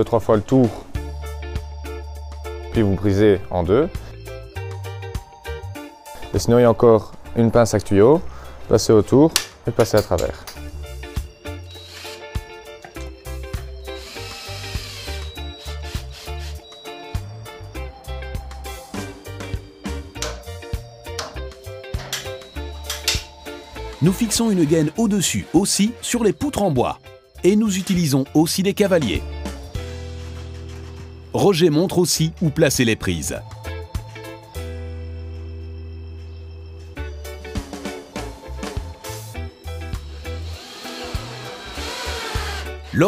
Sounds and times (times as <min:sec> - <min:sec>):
Speech: 0:00.0 - 0:00.9, 0:02.8 - 0:04.0, 0:06.3 - 0:10.5, 0:24.0 - 0:29.2, 0:31.3 - 0:33.4
Music: 0:00.0 - 0:43.0.